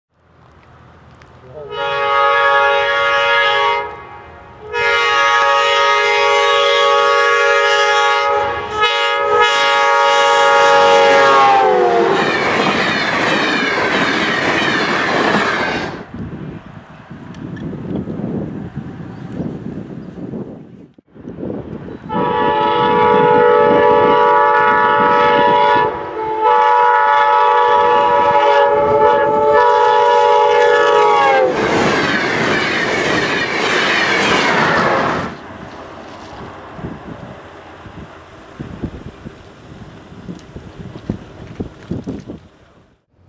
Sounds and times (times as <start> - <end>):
Railroad car, train wagon: 0.1 - 43.2
Train horn: 1.6 - 12.3, 22.1 - 31.6.